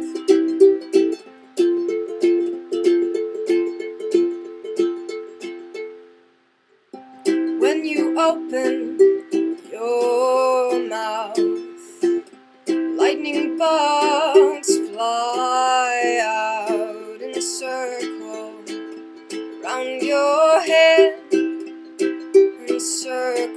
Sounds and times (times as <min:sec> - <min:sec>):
Inside, small room: 0:00.0 - 0:23.5
Ukulele: 0:00.0 - 0:23.5.